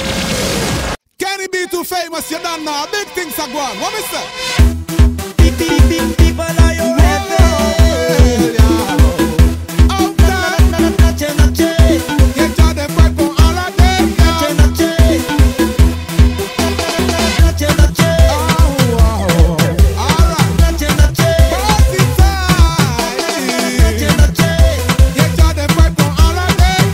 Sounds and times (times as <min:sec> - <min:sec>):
Dance music: 0:02.0 - 0:26.9
Pop music: 0:02.3 - 0:26.9.